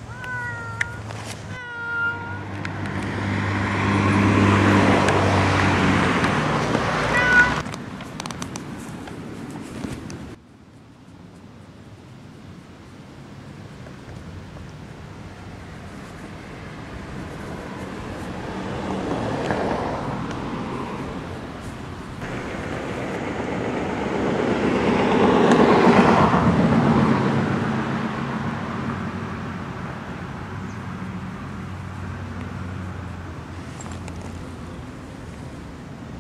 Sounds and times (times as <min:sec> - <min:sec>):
Cat: 0:00.1 - 0:02.5, 0:07.1 - 0:07.6.